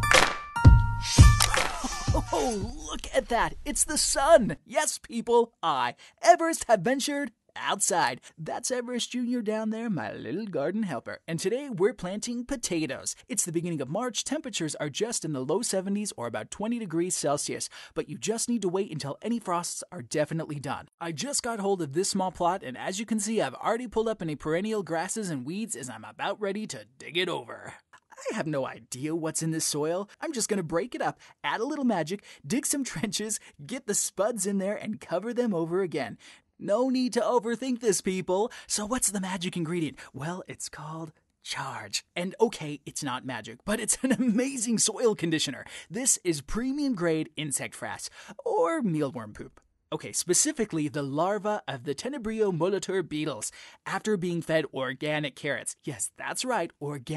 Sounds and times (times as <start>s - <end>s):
Speech: 1.8s - 57.1s.